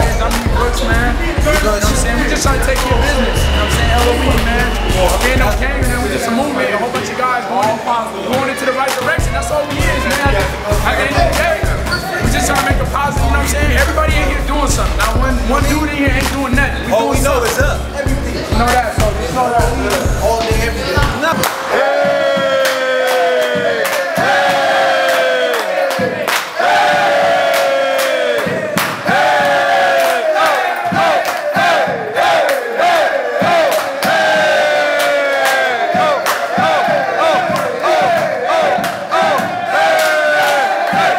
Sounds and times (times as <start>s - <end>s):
Inside, large room or hall: 0.0s - 41.1s.